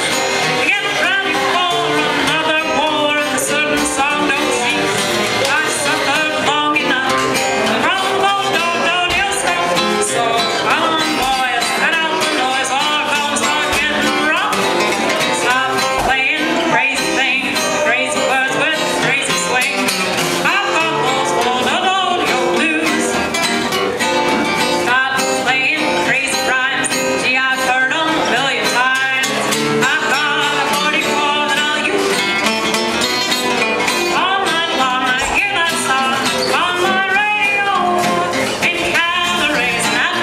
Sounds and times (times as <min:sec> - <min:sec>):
Acoustic guitar: 0:00.0 - 0:40.2
Blues: 0:00.0 - 0:40.2.